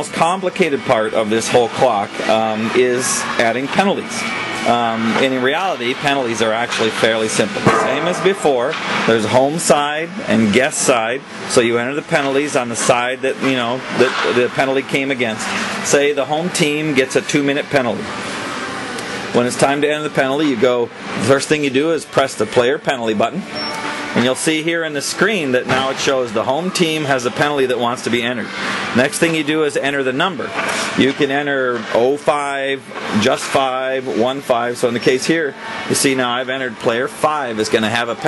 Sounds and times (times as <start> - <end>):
Speech: 0.0 - 18.1, 19.3 - 23.5, 24.2 - 38.2
Music: 0.0 - 38.2.